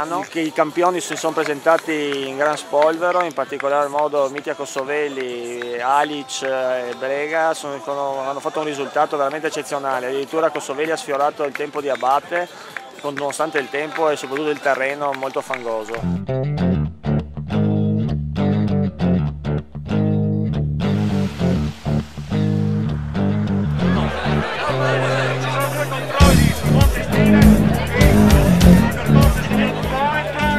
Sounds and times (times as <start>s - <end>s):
Speech: 0.0s - 16.0s, 24.8s - 30.5s
Music: 0.0s - 30.5s.